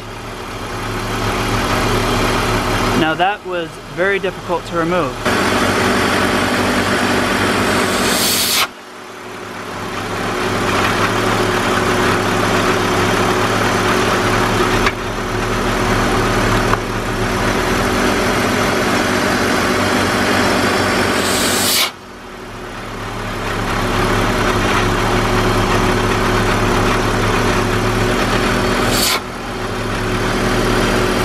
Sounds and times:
Engine: 0:00.0 - 0:31.2
Speech: 0:03.0 - 0:05.2.

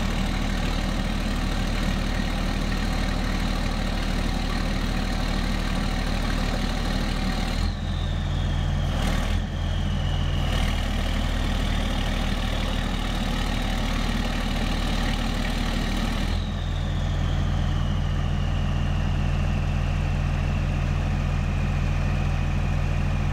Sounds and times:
Truck: 0:00.0 - 0:23.3.

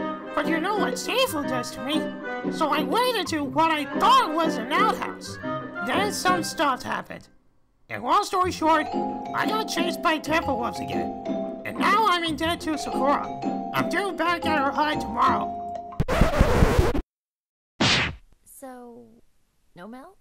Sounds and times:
Music: 0:00.0 - 0:07.3, 0:07.9 - 0:17.0
Speech: 0:00.4 - 0:02.0, 0:02.6 - 0:07.3, 0:07.9 - 0:11.1, 0:11.7 - 0:15.5, 0:18.5 - 0:19.2, 0:19.8 - 0:20.2.

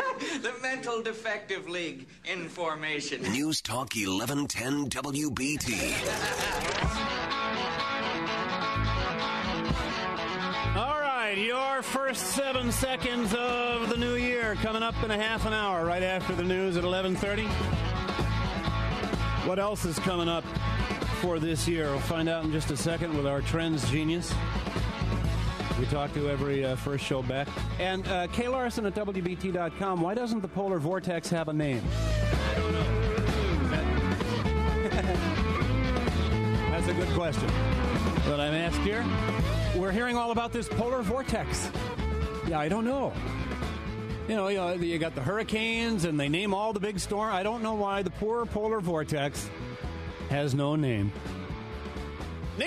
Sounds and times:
Speech: 0:00.4 - 0:06.6, 0:21.2 - 0:24.3, 0:25.8 - 0:31.8, 0:42.5 - 0:43.2, 0:44.3 - 0:49.5, 0:50.3 - 0:51.1
Music: 0:03.2 - 0:52.6.

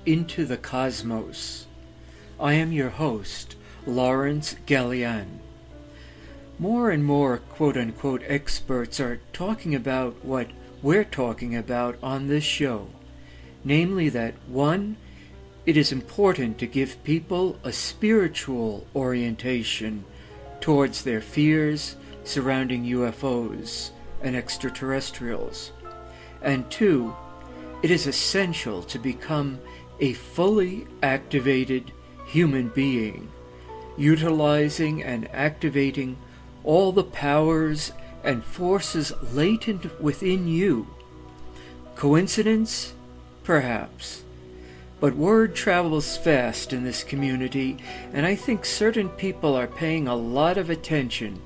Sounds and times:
Speech: 0:00.0 - 0:01.7, 0:02.4 - 0:05.4, 0:06.6 - 0:13.0, 0:13.6 - 0:15.0, 0:15.7 - 0:25.8, 0:26.4 - 0:27.2, 0:27.8 - 0:33.3, 0:34.0 - 0:40.9, 0:42.0 - 0:44.3, 0:45.0 - 0:51.4
Music: 0:00.0 - 0:51.4.

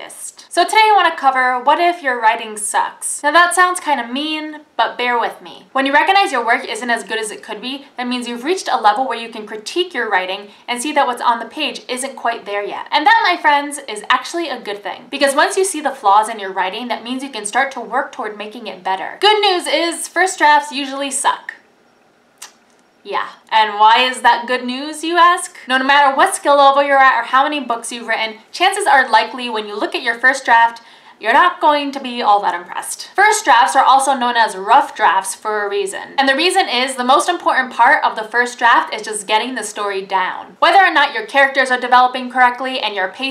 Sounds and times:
Speech: 0:00.0 - 0:21.6, 0:23.1 - 0:43.3.

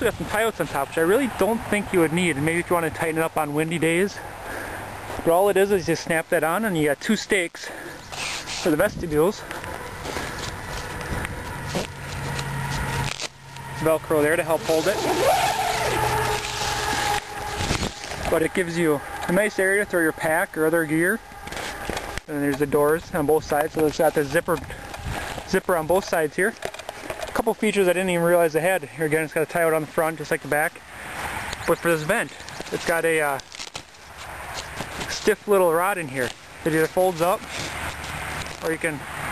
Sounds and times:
Speech: 0:00.0 - 0:04.2, 0:05.2 - 0:07.7, 0:08.6 - 0:09.4, 0:11.7 - 0:11.9, 0:13.8 - 0:15.2, 0:18.3 - 0:21.2, 0:22.3 - 0:24.8, 0:25.5 - 0:26.6, 0:27.4 - 0:30.8, 0:31.6 - 0:33.4, 0:35.1 - 0:37.4, 0:38.6 - 0:39.0
Outside, rural or natural: 0:00.0 - 0:39.3.

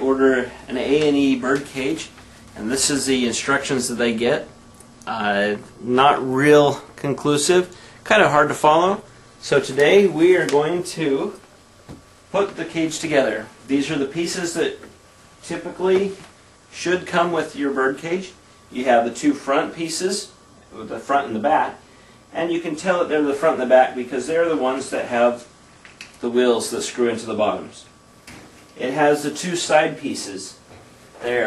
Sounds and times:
Speech: 0:00.0 - 0:11.4, 0:12.3 - 0:25.5, 0:26.2 - 0:28.0, 0:28.8 - 0:31.4.

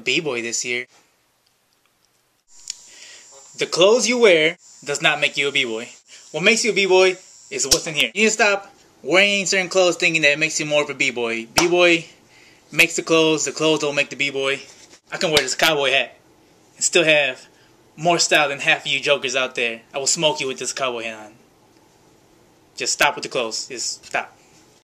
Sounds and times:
Speech: 0:00.0 - 0:00.9, 0:03.6 - 0:16.2, 0:16.8 - 0:21.4, 0:22.8 - 0:24.4.

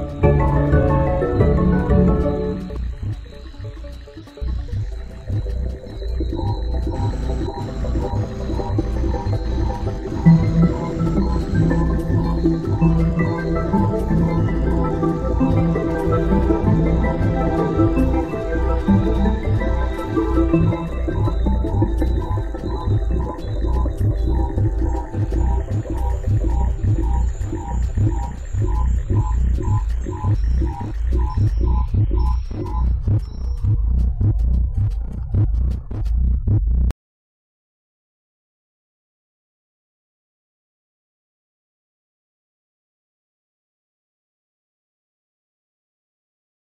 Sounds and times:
Music: 0:00.0 - 0:36.9.

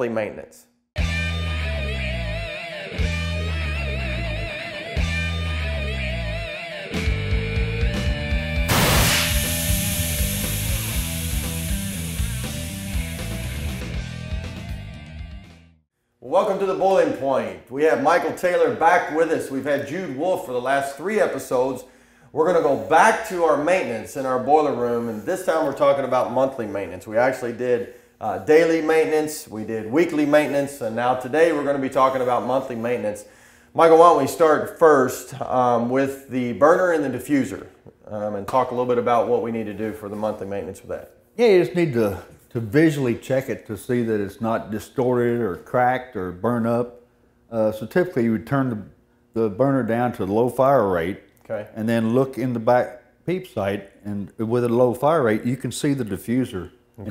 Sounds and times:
Speech: 0:00.0 - 0:00.7, 0:16.2 - 0:57.1.

